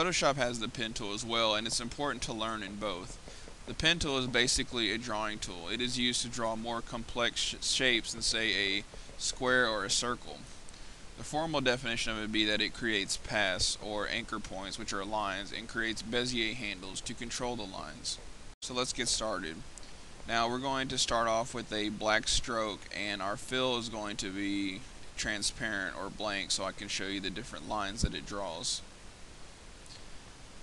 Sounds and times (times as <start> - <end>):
Speech: 0.0 - 10.5, 11.2 - 19.7, 20.3 - 28.9.